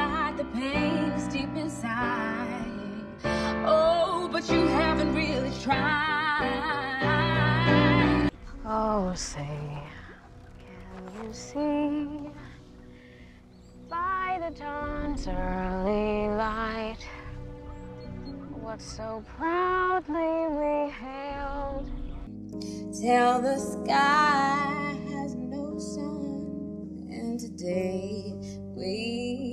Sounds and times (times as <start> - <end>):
Female singing: 0.0 - 10.1, 10.9 - 12.5, 13.9 - 17.4, 18.5 - 21.9, 22.6 - 29.5
Music: 0.0 - 29.5.